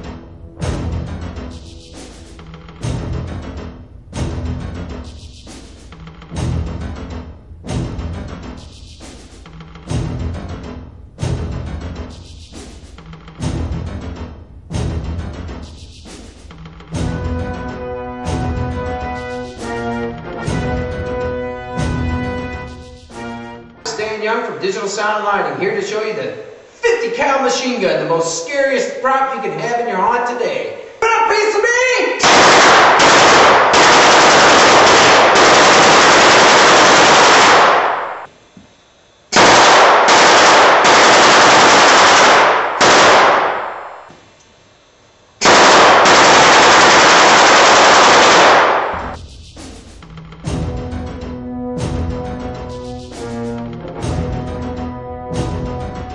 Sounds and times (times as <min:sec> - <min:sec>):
Music: 0:00.0 - 0:24.4, 0:47.8 - 0:56.1.